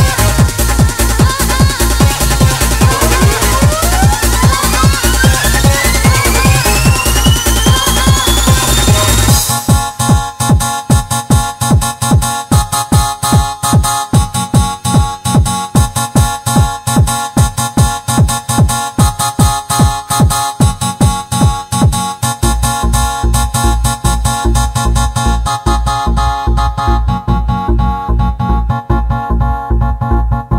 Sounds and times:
Techno: 0.0 - 30.5
Trance music: 0.0 - 30.5.

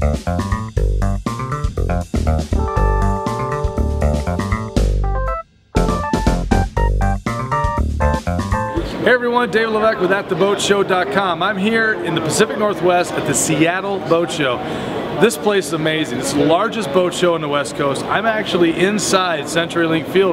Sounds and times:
Speech: 9.0 - 20.3.

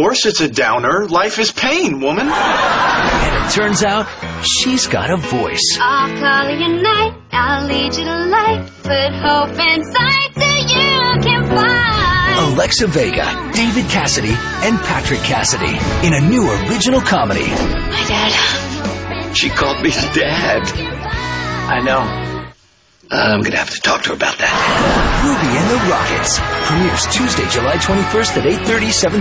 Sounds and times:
Speech: 0.0 - 2.3, 3.2 - 5.8, 23.1 - 24.6, 25.2 - 29.2
Music: 3.2 - 22.6, 24.7 - 29.2.

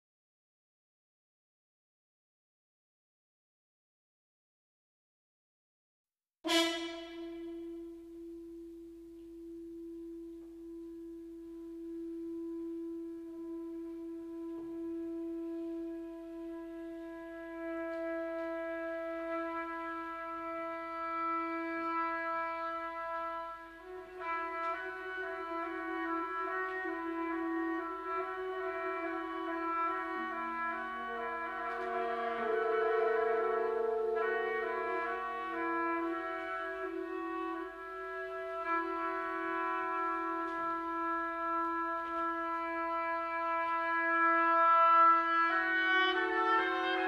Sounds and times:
Music: 6.4 - 47.0.

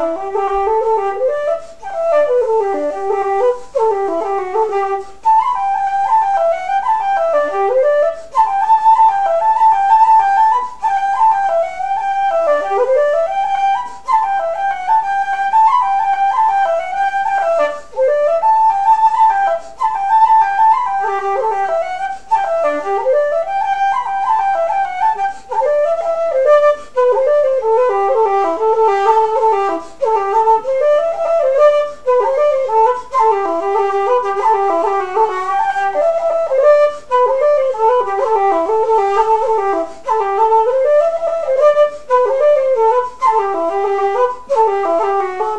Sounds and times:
Flute: 0.0 - 45.5.

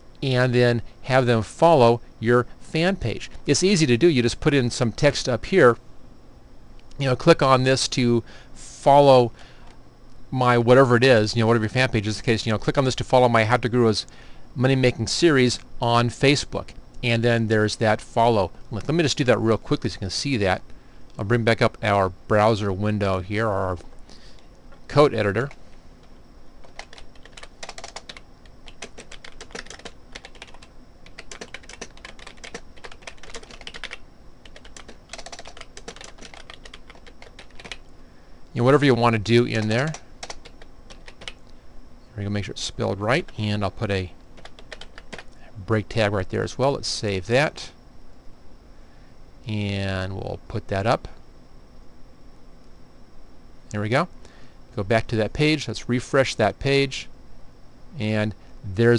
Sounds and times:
Computer keyboard: 26.6 - 37.9, 39.6 - 41.4, 44.4 - 45.3.

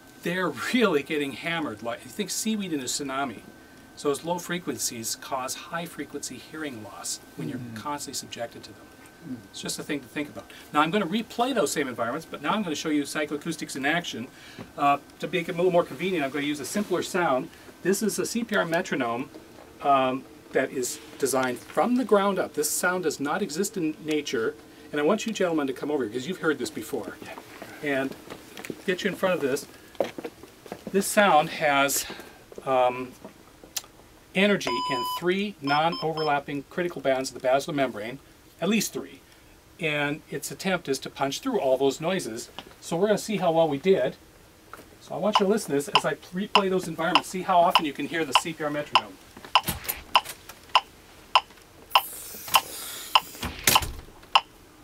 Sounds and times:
Speech: 0.2 - 28.2, 28.8 - 29.7, 30.9 - 33.2, 34.4 - 39.2, 39.8 - 44.2, 45.0 - 49.2.

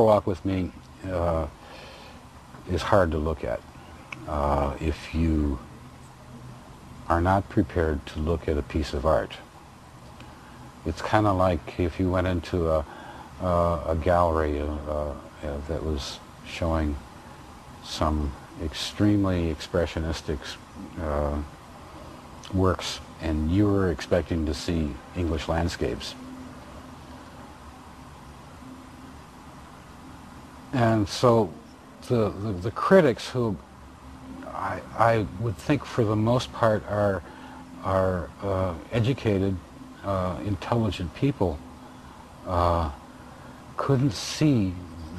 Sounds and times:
Speech: 0.0 - 1.6, 2.6 - 3.6, 4.2 - 5.7, 7.1 - 9.5, 10.8 - 17.0, 17.8 - 21.5, 22.4 - 26.2, 30.7 - 33.6, 34.4 - 41.6, 42.5 - 43.0, 43.8 - 45.1.

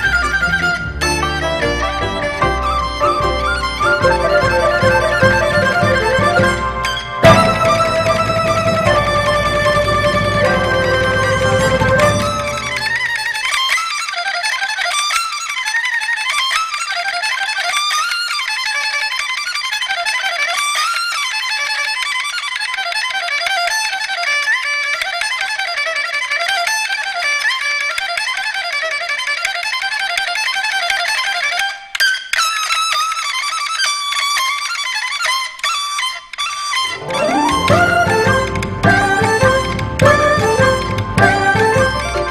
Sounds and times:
Classical music: 0.0 - 13.4, 36.8 - 42.3
Musical instrument: 0.0 - 13.8, 36.7 - 42.3
Inside, large room or hall: 0.0 - 42.3.

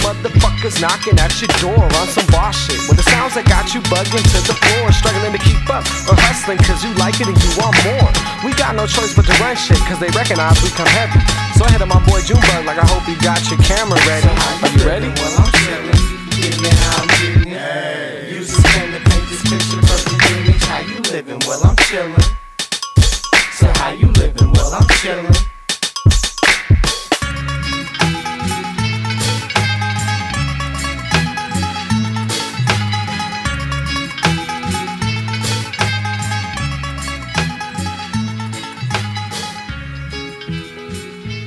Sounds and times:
Hip hop music: 0.0 - 41.4.

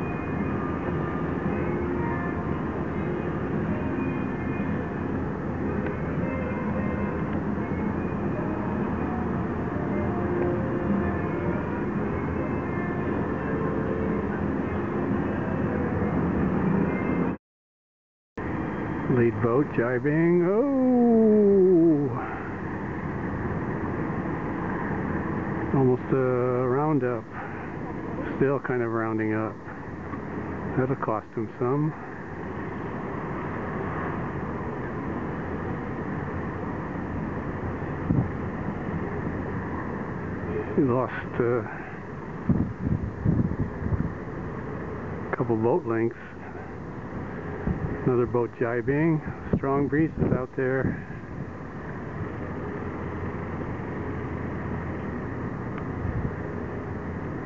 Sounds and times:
Vehicle: 0.0 - 17.4, 18.4 - 57.4
Speech: 19.1 - 22.4, 25.7 - 27.3, 28.2 - 29.6, 30.7 - 32.0, 40.7 - 41.8, 45.4 - 46.4, 48.0 - 51.0.

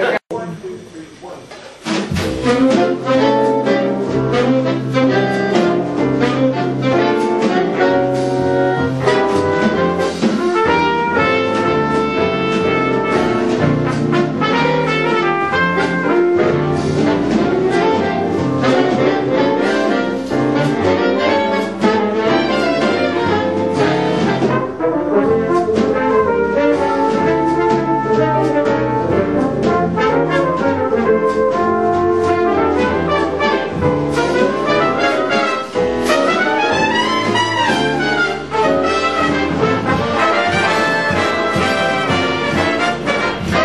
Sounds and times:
Music: 1.8 - 43.6.

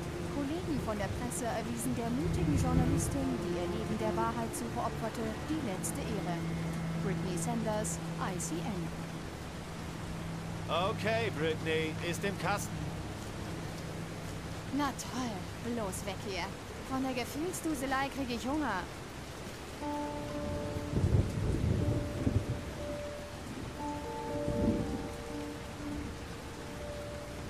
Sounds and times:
Rain: 0.0 - 27.4
Thunderstorm: 19.8 - 26.2.

